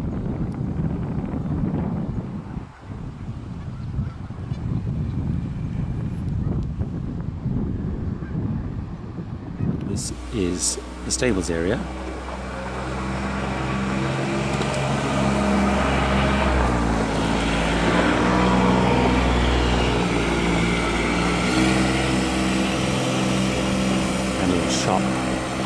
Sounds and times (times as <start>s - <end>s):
Speech: 9.9s - 11.9s, 24.4s - 25.2s
Car passing by: 10.0s - 25.6s.